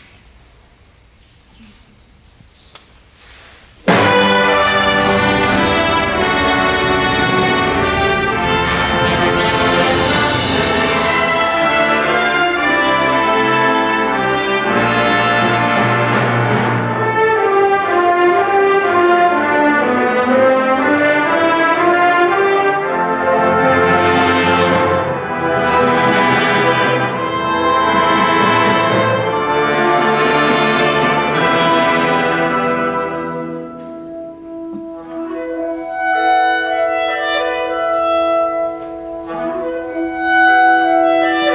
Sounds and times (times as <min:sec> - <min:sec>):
Orchestra: 0:03.1 - 0:41.5.